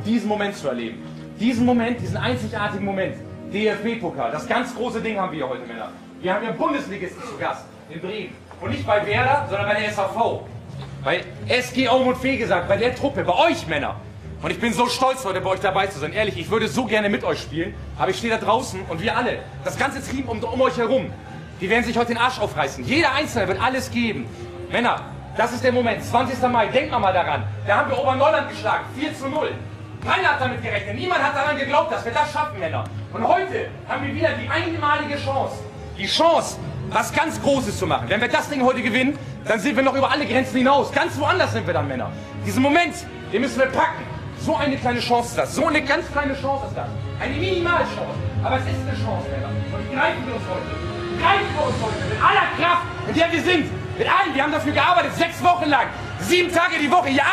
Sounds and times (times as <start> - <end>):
Male speech, man speaking: 0.0 - 57.3.